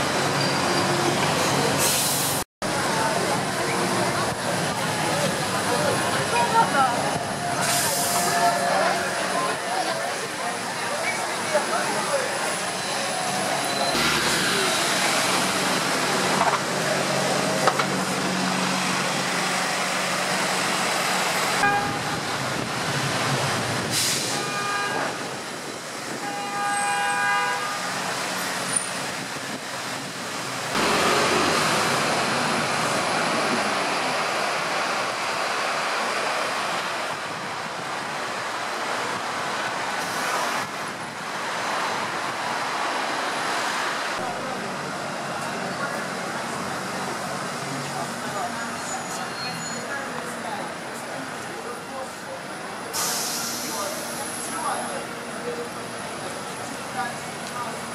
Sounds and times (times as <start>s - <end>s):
Bus: 0.0s - 57.9s.